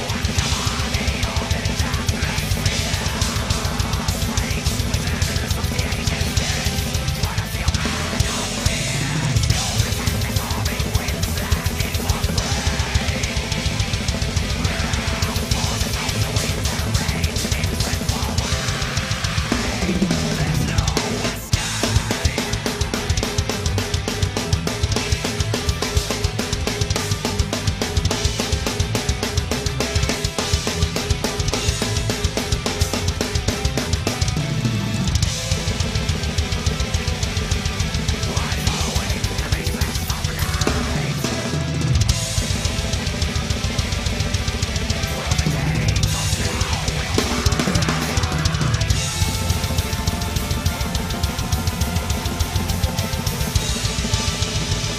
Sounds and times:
Guitar: 0.0s - 54.9s.

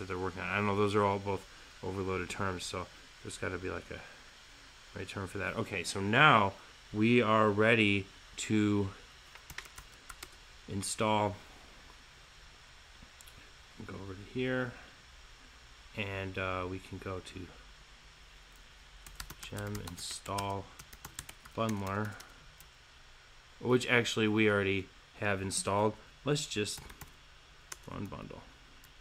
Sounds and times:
Speech: 0.0s - 4.1s, 5.0s - 9.0s, 10.7s - 11.4s, 13.8s - 14.9s, 16.0s - 17.6s, 19.4s - 20.8s, 21.6s - 22.2s, 23.6s - 26.9s, 27.9s - 28.5s
Computer keyboard: 9.4s - 10.4s, 19.0s - 22.7s, 26.8s - 28.2s.

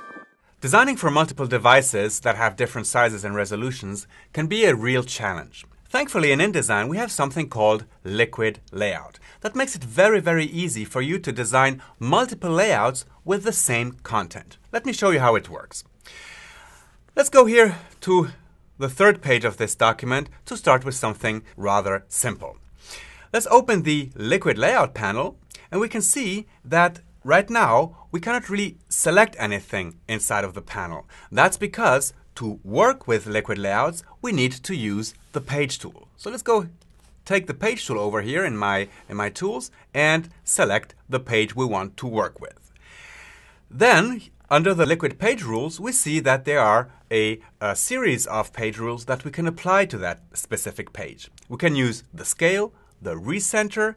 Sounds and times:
Speech: 0.6s - 15.9s, 17.2s - 22.6s, 23.3s - 42.6s, 43.7s - 53.9s.

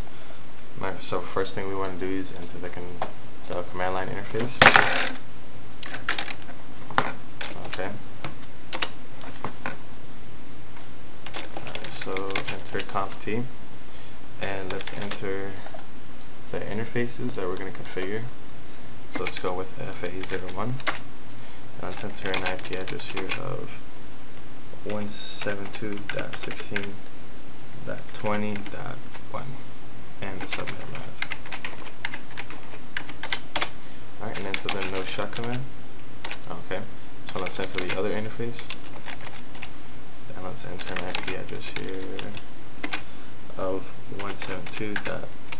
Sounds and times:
Speech: 0.8s - 5.2s, 7.5s - 8.0s, 11.8s - 13.5s, 14.4s - 15.7s, 16.5s - 18.4s, 19.1s - 20.9s, 21.8s - 23.8s, 24.8s - 27.0s, 27.8s - 29.6s, 30.2s - 31.3s, 34.2s - 35.7s, 36.4s - 38.8s, 40.3s - 42.4s, 43.5s - 45.4s.

